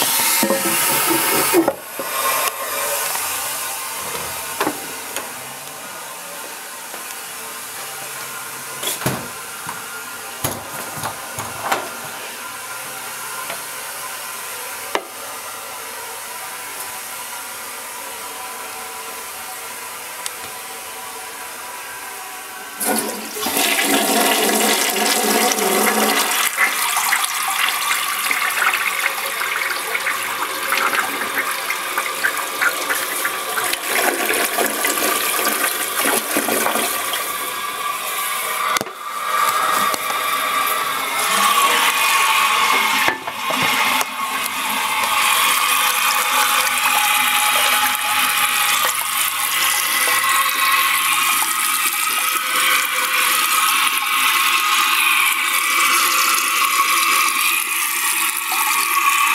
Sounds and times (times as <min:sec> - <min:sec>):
Toilet flush: 0:00.0 - 0:06.3, 0:22.7 - 0:59.3
Water: 0:39.4 - 0:59.3.